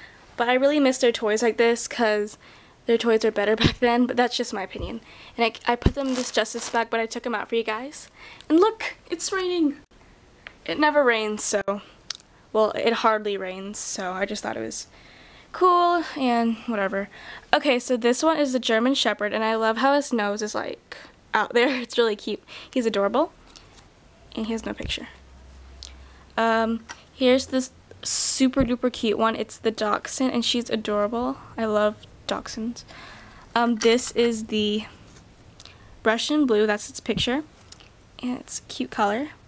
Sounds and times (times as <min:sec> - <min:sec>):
Speech: 0:00.4 - 0:09.9, 0:10.6 - 0:14.9, 0:15.6 - 0:23.3, 0:24.3 - 0:25.2, 0:26.4 - 0:32.9, 0:33.6 - 0:35.0, 0:36.0 - 0:37.5, 0:38.2 - 0:39.4.